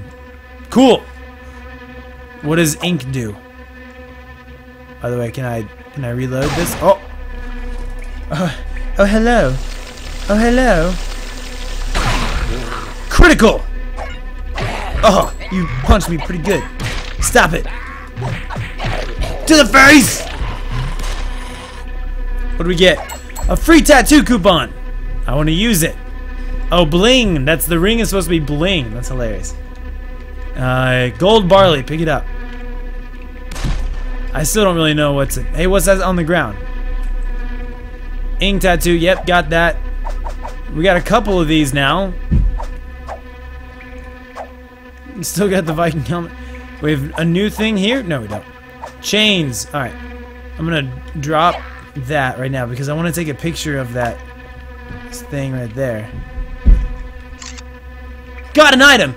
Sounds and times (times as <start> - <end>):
Music: 0.0 - 59.1
Speech: 15.0 - 17.7, 22.6 - 24.7, 26.7 - 29.6, 30.6 - 32.2, 34.4 - 36.6, 40.7 - 42.2, 45.1 - 48.4, 49.0 - 49.9, 50.6 - 54.2, 55.1 - 56.2, 58.5 - 59.1.